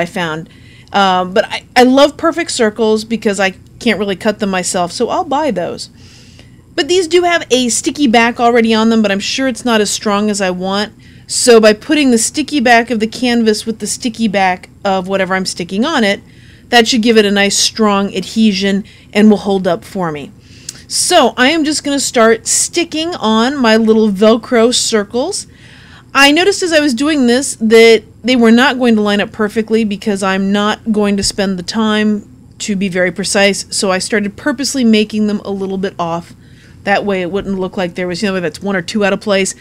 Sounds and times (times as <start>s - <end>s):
Speech: 0.0s - 5.9s, 6.8s - 25.5s, 26.2s - 39.6s.